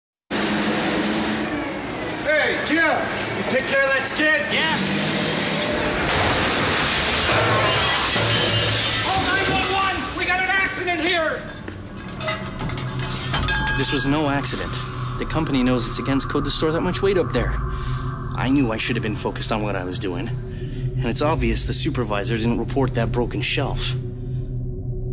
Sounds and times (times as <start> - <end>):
Engine: 0.3 - 2.1, 4.5 - 7.7
Speech: 9.1 - 11.5, 13.8 - 17.6, 18.4 - 20.4, 21.0 - 24.0.